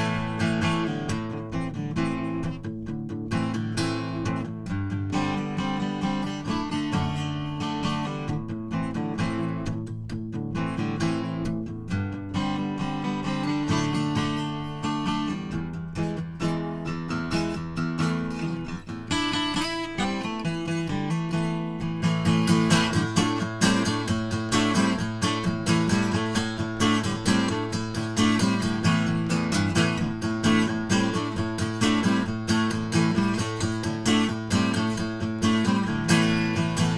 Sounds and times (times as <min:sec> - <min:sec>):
Acoustic guitar: 0:00.0 - 0:36.9
Strum: 0:00.0 - 0:36.9.